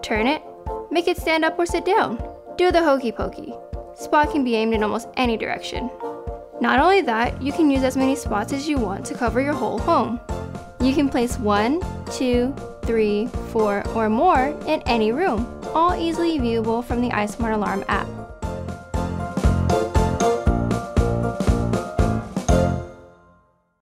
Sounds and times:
Speech: 0.0 - 5.9, 6.6 - 10.2, 10.8 - 18.1
Music: 0.0 - 23.8.

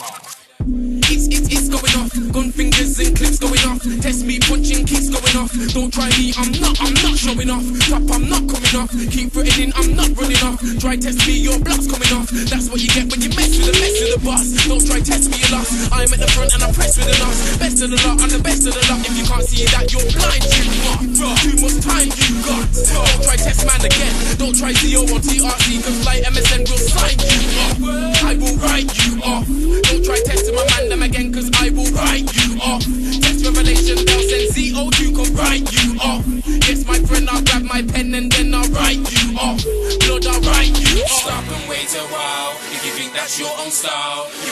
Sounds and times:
Music: 0.0 - 44.5.

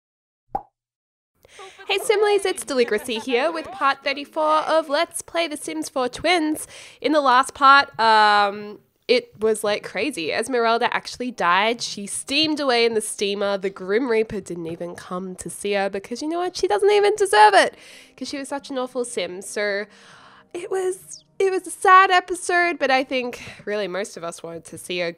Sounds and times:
Speech: 1.6 - 19.9, 20.6 - 25.1.

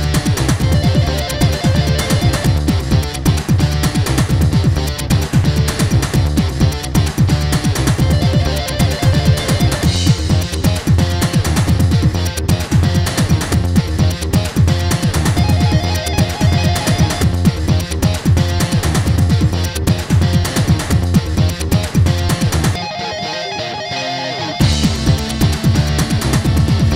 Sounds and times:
Disco: 0.0 - 26.9
Dance music: 0.3 - 3.5, 7.7 - 11.6, 14.9 - 19.1, 22.8 - 26.6.

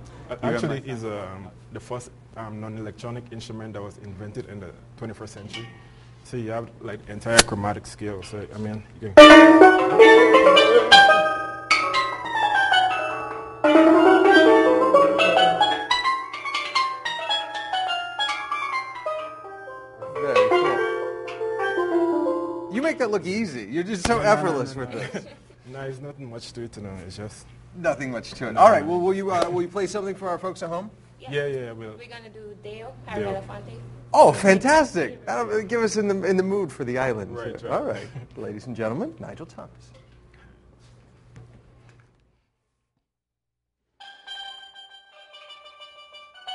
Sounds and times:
Conversation: 0.1 - 11.4, 20.0 - 40.6.

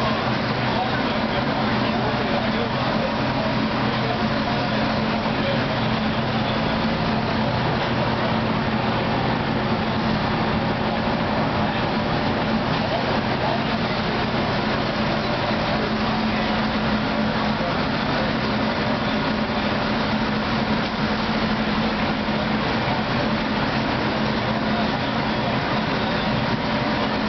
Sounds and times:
Speech: 0.0 - 27.2.

